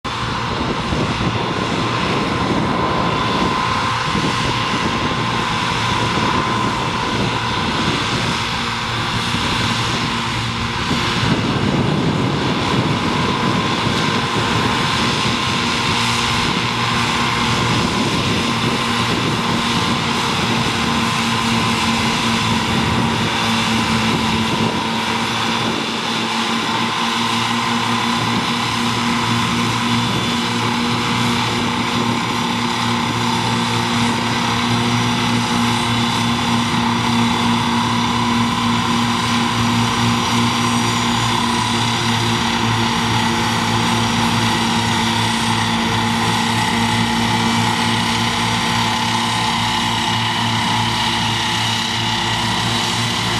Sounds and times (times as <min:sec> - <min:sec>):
Truck: 0:00.0 - 0:53.3.